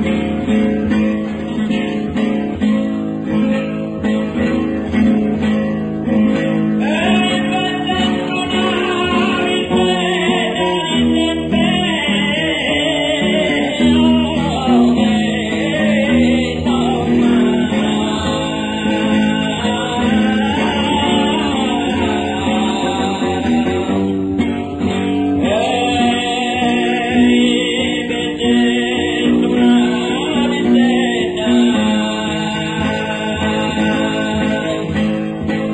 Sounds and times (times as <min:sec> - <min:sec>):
Music: 0:00.0 - 0:35.7
Singing: 0:06.8 - 0:35.7.